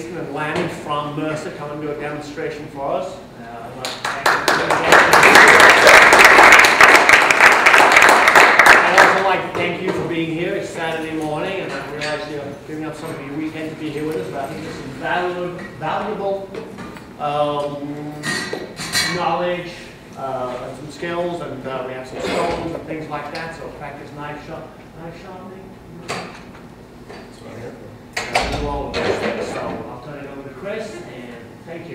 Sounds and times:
Speech: 0:00.0 - 0:05.3, 0:08.8 - 0:16.6, 0:17.2 - 0:25.8, 0:27.4 - 0:31.9.

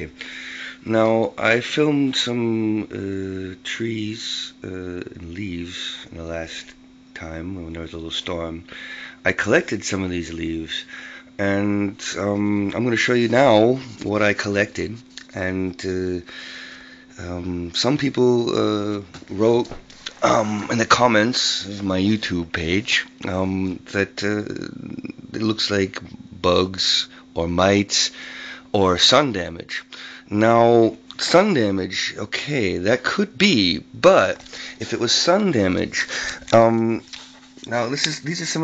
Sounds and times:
Speech: 0:00.8 - 0:16.3, 0:17.2 - 0:38.6.

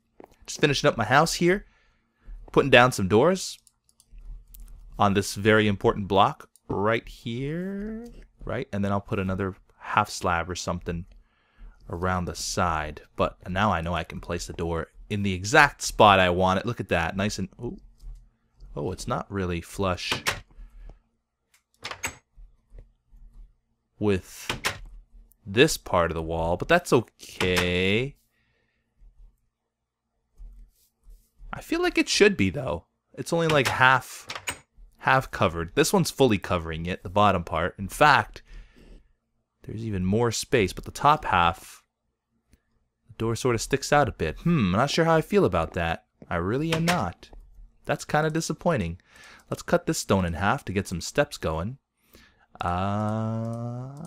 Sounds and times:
Speech: 0:00.5 - 0:01.6, 0:02.5 - 0:03.6, 0:05.0 - 0:11.1, 0:11.9 - 0:17.8, 0:18.7 - 0:20.4, 0:24.0 - 0:24.6, 0:25.5 - 0:28.2, 0:31.5 - 0:34.3, 0:35.0 - 0:38.4, 0:39.7 - 0:41.8, 0:43.2 - 0:47.3, 0:47.9 - 0:51.8, 0:52.6 - 0:54.0.

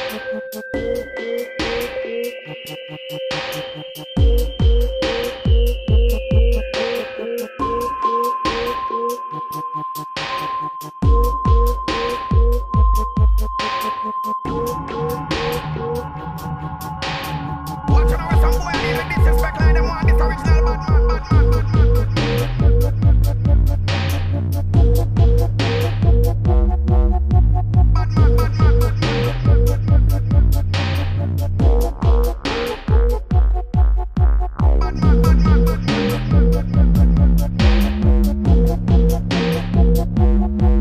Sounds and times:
Dubstep: 0:00.0 - 0:40.8.

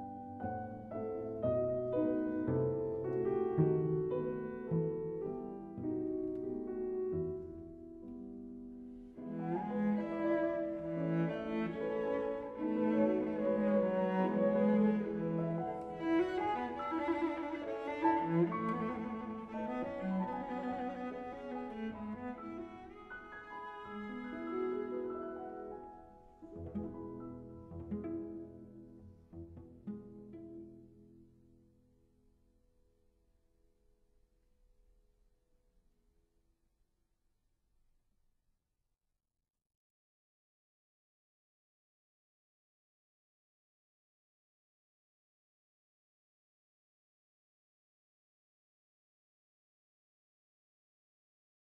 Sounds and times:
Piano: 0:00.0 - 0:32.5
Cello: 0:00.0 - 0:32.7.

